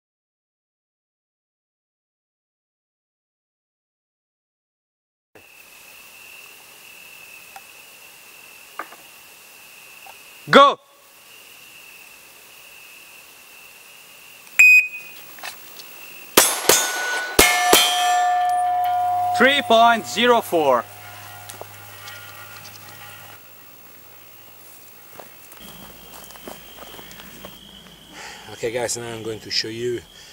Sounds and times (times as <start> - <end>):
Outside, rural or natural: 5.4 - 30.3
Speech: 10.5 - 10.8, 19.4 - 20.9, 28.5 - 30.1
Beep, bleep: 14.6 - 15.1.